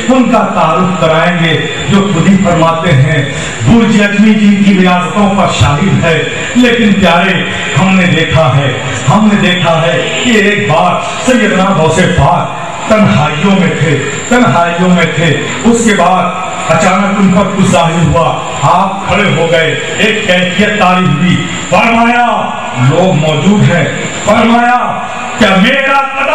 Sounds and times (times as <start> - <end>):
Male speech, man speaking: 0.0 - 26.3.